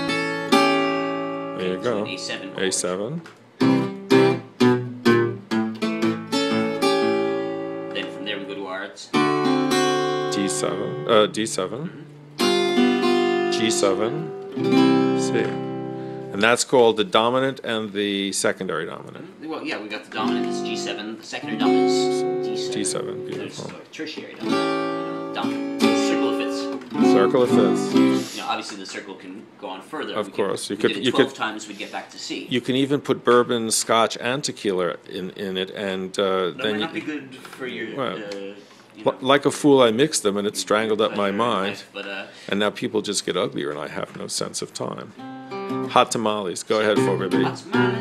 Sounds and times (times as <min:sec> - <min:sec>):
Guitar: 0:00.0 - 0:18.0, 0:18.8 - 0:29.2, 0:36.4 - 0:48.0
Speech: 0:01.6 - 0:03.2, 0:08.0 - 0:09.2, 0:10.3 - 0:12.1, 0:13.5 - 0:14.3, 0:15.2 - 0:15.6, 0:16.3 - 0:24.4, 0:25.4 - 0:45.2, 0:45.9 - 0:48.0.